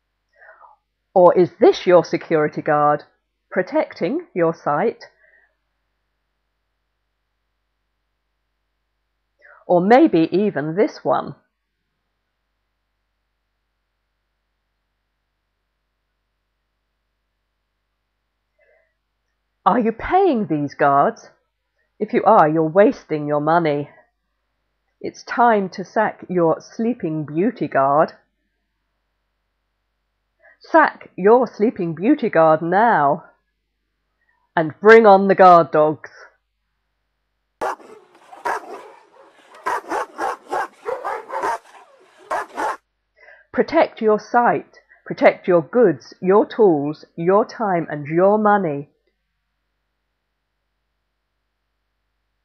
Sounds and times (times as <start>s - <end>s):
Speech: 1.2s - 5.2s, 9.6s - 11.4s, 19.7s - 21.4s, 22.0s - 24.0s, 25.0s - 28.2s, 30.6s - 33.4s, 34.6s - 36.4s, 43.6s - 48.9s.